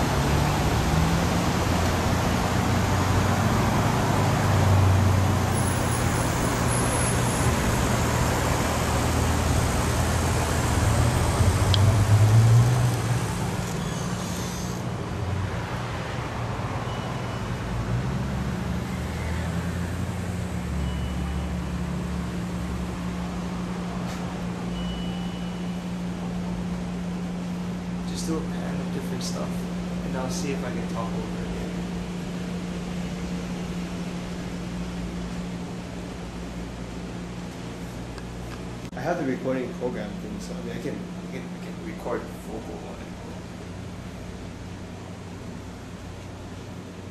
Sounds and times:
Speech: 28.1 - 31.8, 38.9 - 43.2.

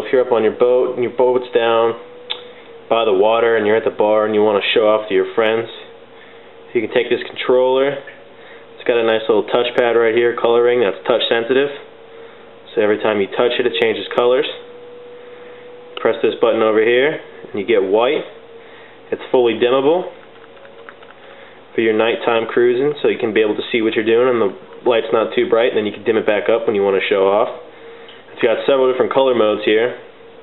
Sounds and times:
Speech: 0.0 - 2.0, 2.9 - 5.9, 6.7 - 8.2, 8.8 - 11.9, 12.7 - 14.7, 16.0 - 18.4, 19.1 - 20.2, 21.8 - 27.7, 28.3 - 30.1.

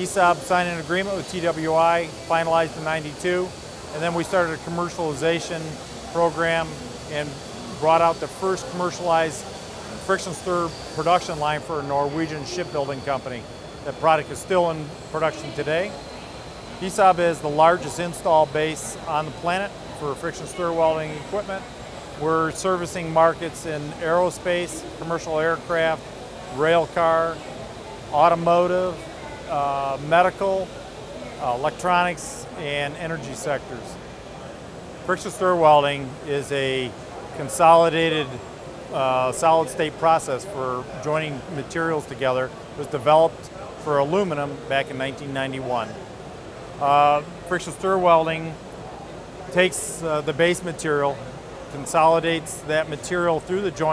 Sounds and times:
Speech: 0.0 - 16.0, 16.8 - 30.8, 31.4 - 34.0, 35.1 - 46.0, 46.8 - 48.6, 49.5 - 53.9.

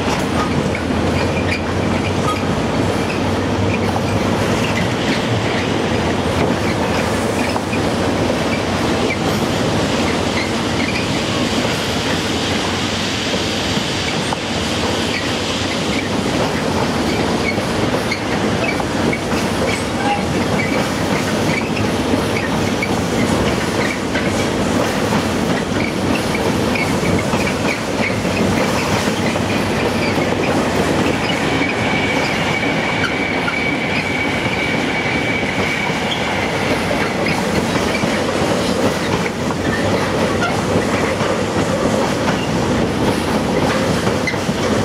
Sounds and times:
Railroad car, train wagon: 0.0 - 44.8
Train: 0.0 - 44.8
Train wheels squealing: 0.4 - 5.8, 6.6 - 7.8, 10.0 - 12.8, 13.4 - 24.6, 25.5 - 38.2, 39.0 - 41.1, 43.6 - 44.8.

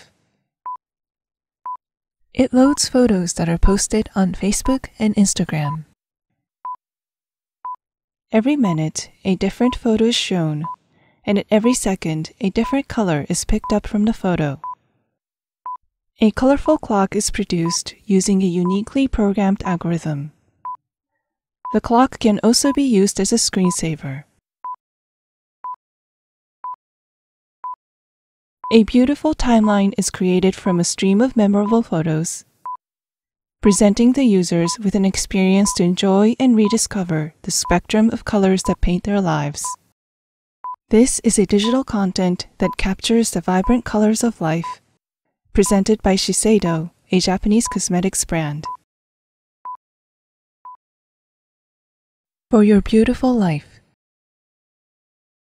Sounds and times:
Speech: 2.4 - 6.0, 8.4 - 10.7, 11.3 - 14.6, 16.2 - 20.3, 21.7 - 24.3, 28.7 - 32.5, 33.6 - 39.8, 40.9 - 44.8, 45.6 - 48.8, 52.5 - 53.8.

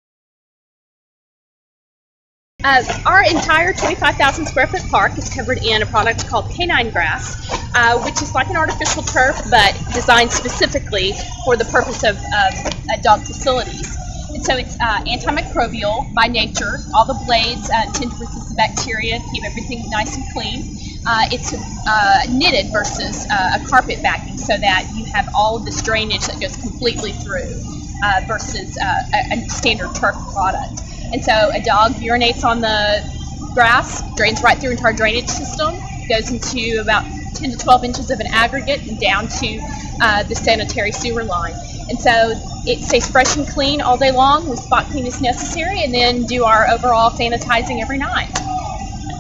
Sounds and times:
Speech: 2.6 - 49.0.

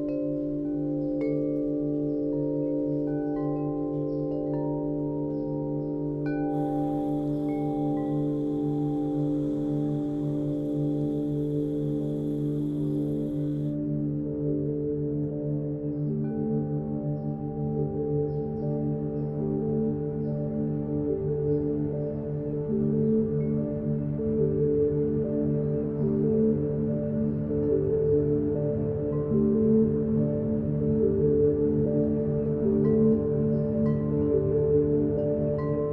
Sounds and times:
Music: 0.0 - 35.9.

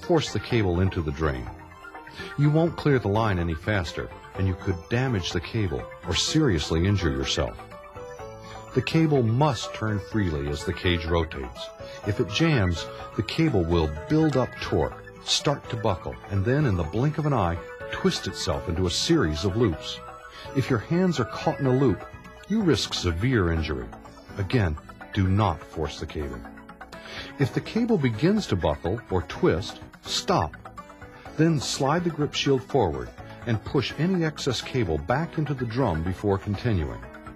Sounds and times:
Speech: 0.0 - 1.6, 2.4 - 7.6, 8.7 - 20.0, 20.6 - 26.4, 27.4 - 30.5, 31.4 - 37.0
Music: 0.0 - 37.3.

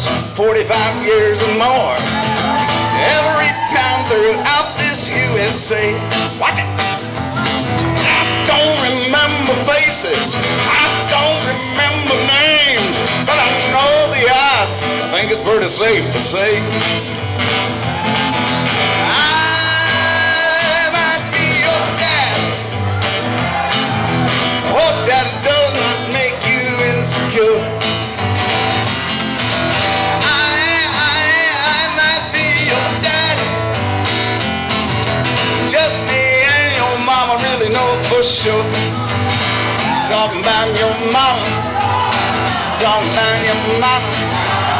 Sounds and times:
Country: 0.0 - 44.7.

